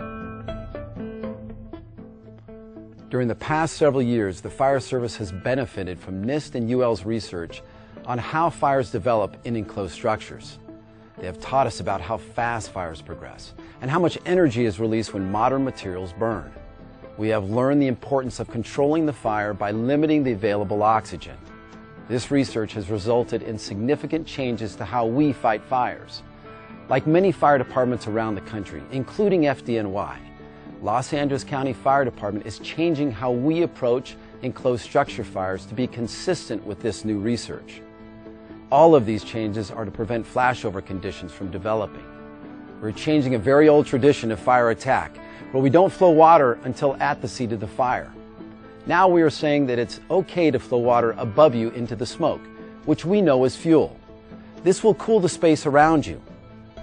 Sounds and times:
Music: 0.0 - 56.8
Speech: 3.1 - 10.6, 11.2 - 16.6, 17.2 - 21.4, 22.1 - 26.2, 26.9 - 37.8, 38.7 - 42.0, 42.8 - 48.2, 48.9 - 54.0, 54.6 - 56.2.

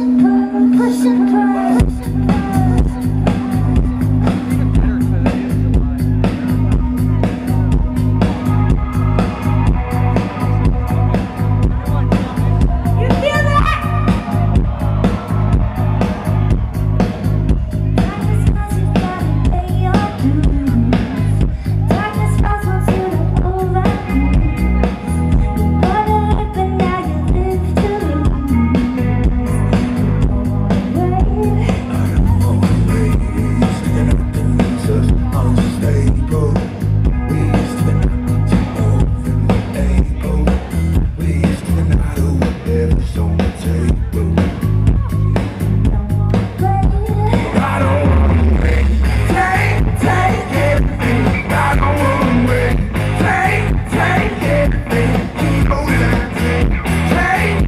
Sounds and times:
Music: 0.0 - 57.6
Speech: 0.1 - 8.2, 11.4 - 14.2.

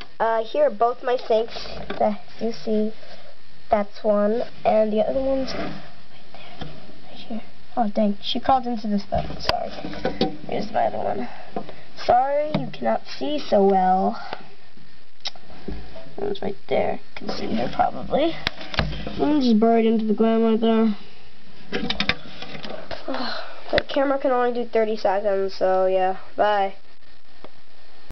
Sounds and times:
Inside, small room: 0.0 - 28.1
Speech: 0.2 - 3.0, 3.7 - 5.8, 7.2 - 9.8, 10.5 - 11.4, 12.0 - 14.3, 16.2 - 18.5, 19.2 - 21.0, 23.1 - 26.8.

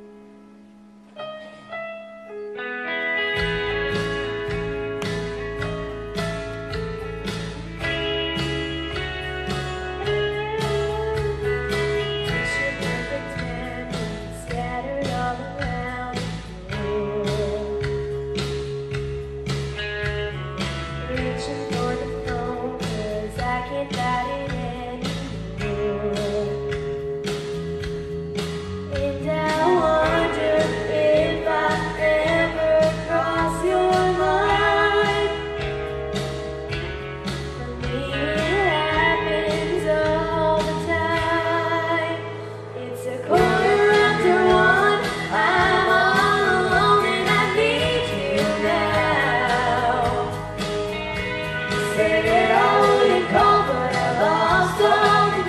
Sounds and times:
Music: 0.0 - 55.4
Female singing: 12.2 - 17.8, 21.1 - 26.5, 28.9 - 35.6, 37.6 - 50.5, 51.8 - 55.4.

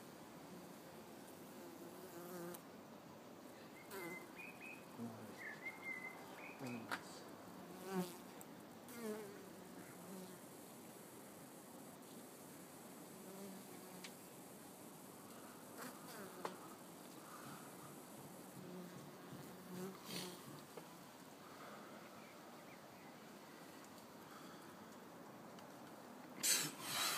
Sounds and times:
Bee, wasp, etc.: 0.4 - 2.7, 3.8 - 5.4, 6.0 - 22.8
Fly, housefly: 0.5 - 2.6, 3.8 - 4.4, 7.7 - 20.7.

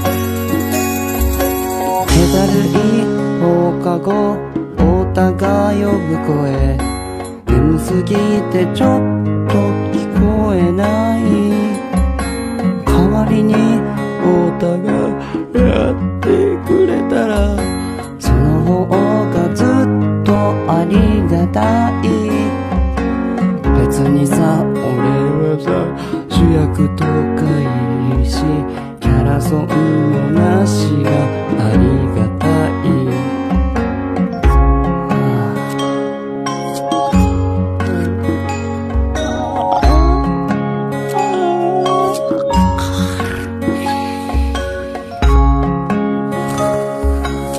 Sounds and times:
Music: 0.0 - 47.5
Male singing: 2.0 - 6.9, 7.5 - 11.8, 12.9 - 22.6, 23.7 - 33.4, 35.1 - 35.7, 37.8 - 38.4.

